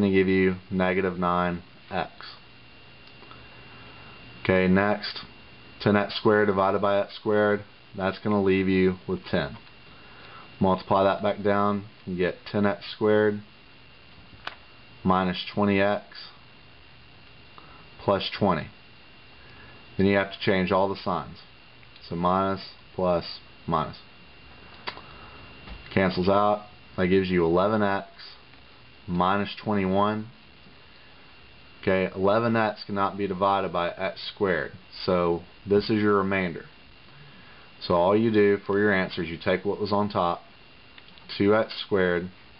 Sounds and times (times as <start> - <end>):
Speech: 0.0 - 2.5, 4.4 - 9.7, 10.6 - 13.5, 15.0 - 16.4, 18.0 - 18.8, 20.0 - 24.1, 25.9 - 28.5, 29.1 - 30.4, 31.8 - 36.8, 37.8 - 40.5, 41.3 - 42.4
Inside, small room: 0.0 - 42.5.